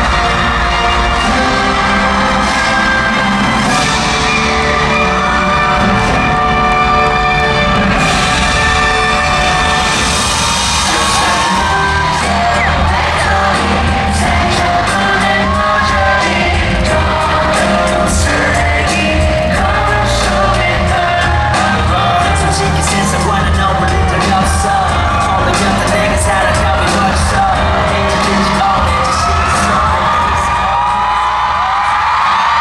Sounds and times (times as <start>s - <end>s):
Music: 0.0s - 32.6s.